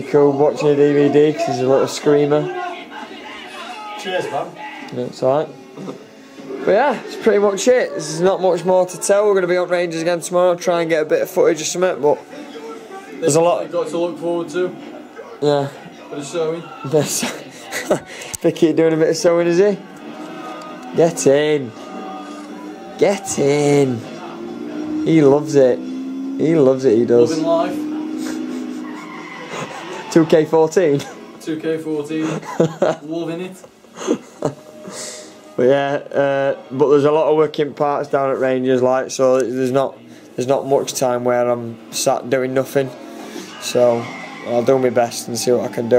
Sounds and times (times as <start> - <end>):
Music: 17.7 - 26.3, 34.2 - 38.4.